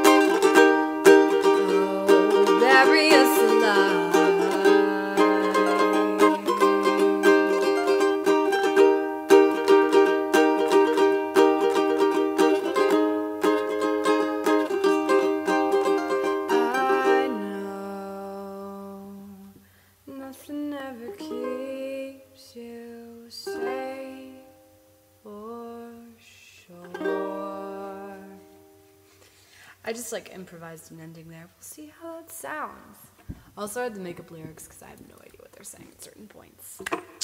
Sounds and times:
Ukulele: 0.0s - 19.6s, 20.4s - 29.3s, 36.8s - 37.2s
Singing: 1.4s - 7.4s.

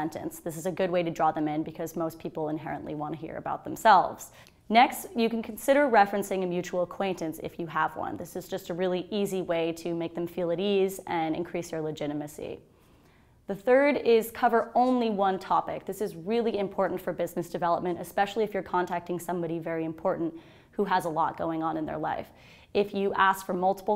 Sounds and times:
Speech: 0.0s - 12.6s, 13.5s - 23.9s.

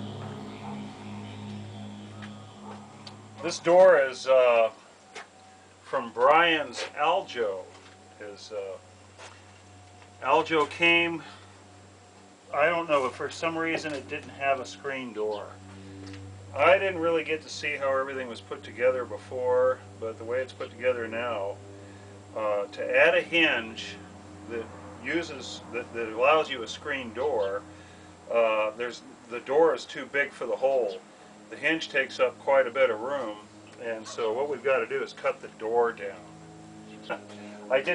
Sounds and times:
Speech: 3.4s - 4.8s, 5.9s - 8.8s, 10.2s - 11.3s, 12.5s - 15.6s, 16.6s - 21.6s, 22.4s - 27.6s, 28.3s - 36.2s, 37.7s - 37.9s.

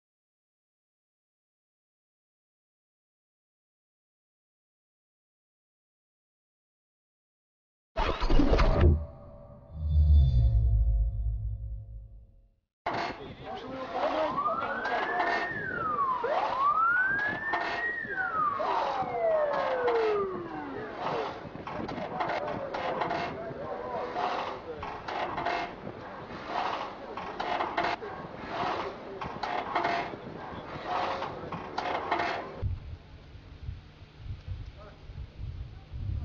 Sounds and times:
Speech: 13.1s - 16.9s, 17.8s - 25.0s, 25.9s - 32.1s, 34.7s - 36.2s.

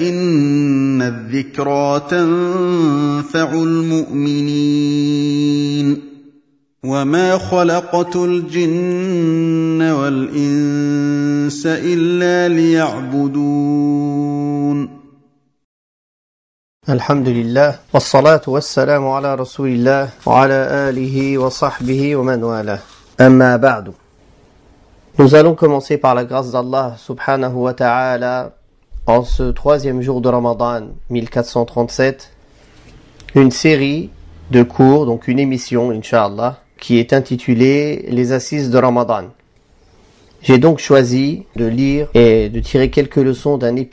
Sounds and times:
Speech: 6.9s - 8.7s, 16.8s - 24.0s, 25.2s - 32.4s, 33.2s - 39.4s, 40.4s - 43.9s.

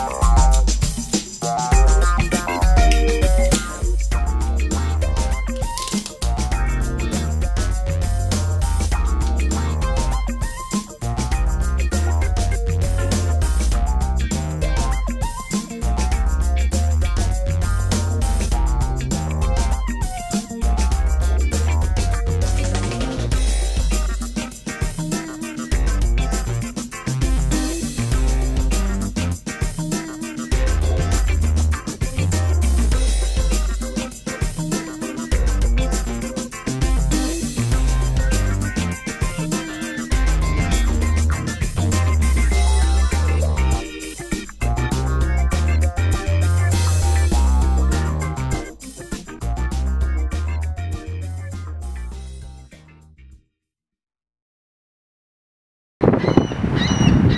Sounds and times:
Music: 0.0s - 53.4s.

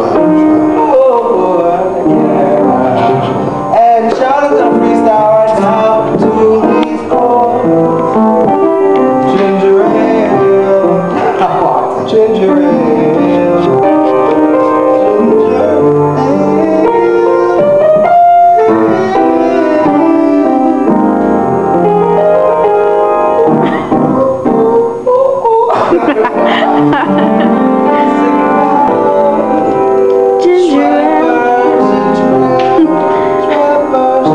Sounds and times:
Male singing: 0.0s - 8.0s, 9.2s - 18.0s, 18.6s - 21.0s, 23.4s - 26.8s, 27.9s - 29.8s, 30.4s - 34.3s
Music: 0.0s - 34.3s.

